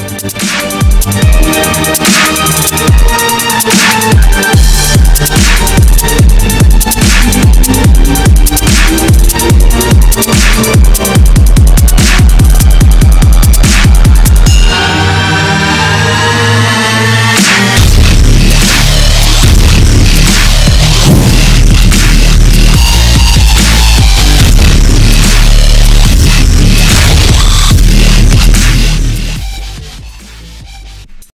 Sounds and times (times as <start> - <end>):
Dubstep: 0.0 - 31.3.